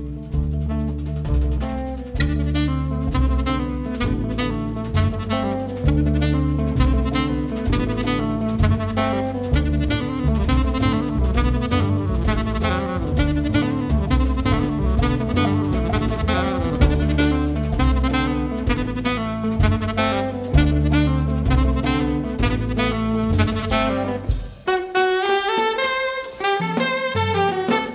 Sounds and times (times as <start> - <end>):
Double bass: 0.0 - 24.8
Drum: 0.0 - 27.9
Drum kit: 0.0 - 27.9
Guitar: 0.0 - 27.9
Saxophone: 0.0 - 27.9.